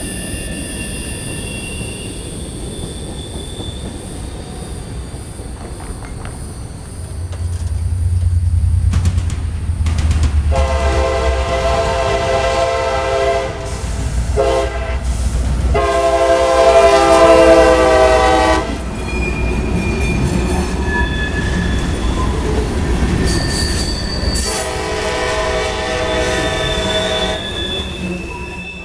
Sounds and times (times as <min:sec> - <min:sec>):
Railroad car, train wagon: 0:00.0 - 0:28.8
Train horn: 0:10.5 - 0:18.8, 0:24.4 - 0:27.6.